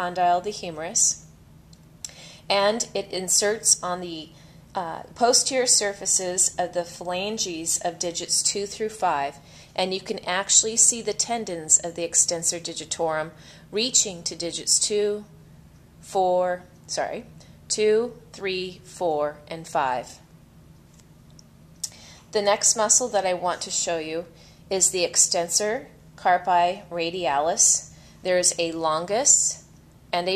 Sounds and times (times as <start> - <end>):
Speech: 0.0 - 1.2, 2.5 - 15.3, 16.1 - 20.2, 22.4 - 30.3.